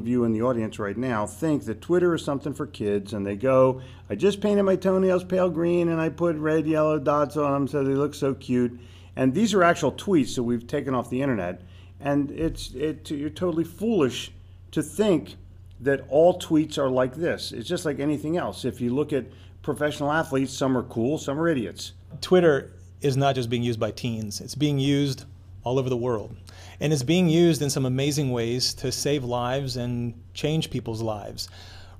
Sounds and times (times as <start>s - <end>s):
Speech: 0.0s - 31.5s.